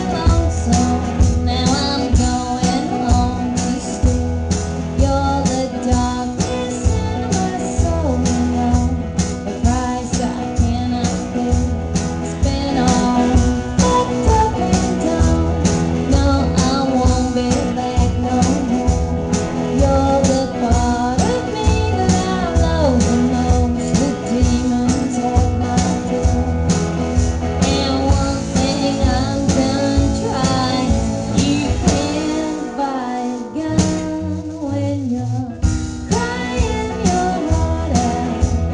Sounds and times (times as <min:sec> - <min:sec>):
Music: 0:00.0 - 0:38.7.